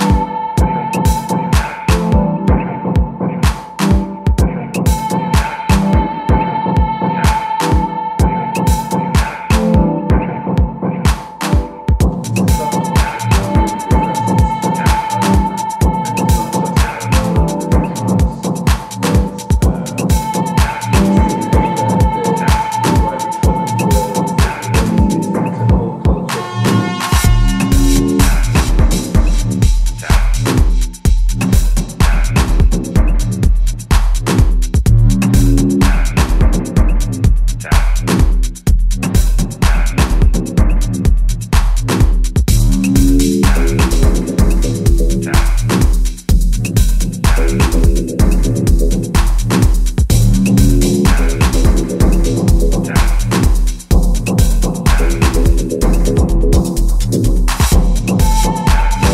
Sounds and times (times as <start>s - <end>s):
Electronica: 0.0s - 59.1s.